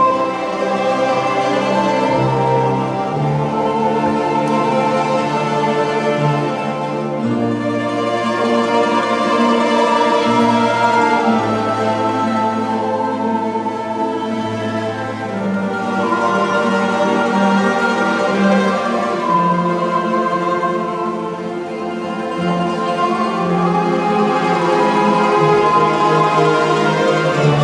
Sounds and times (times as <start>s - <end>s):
Mandolin: 0.0s - 27.6s
Orchestra: 0.0s - 27.6s.